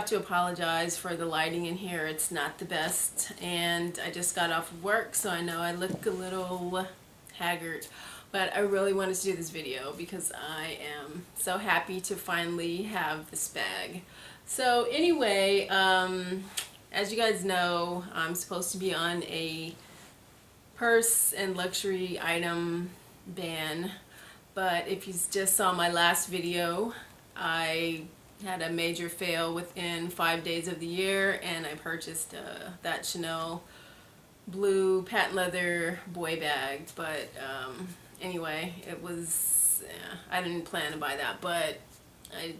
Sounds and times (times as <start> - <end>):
Speech: 0.0 - 19.8, 20.8 - 24.0, 24.6 - 33.6, 34.5 - 42.5.